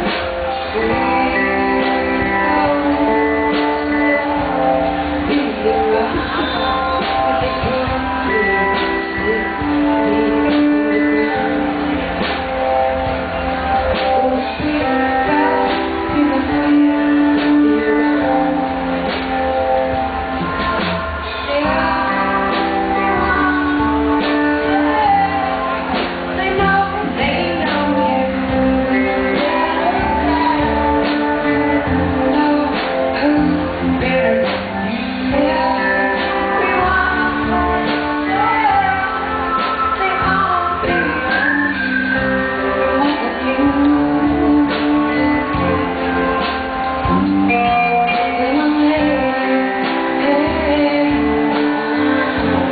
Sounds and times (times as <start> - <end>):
Music: 0.0 - 52.7.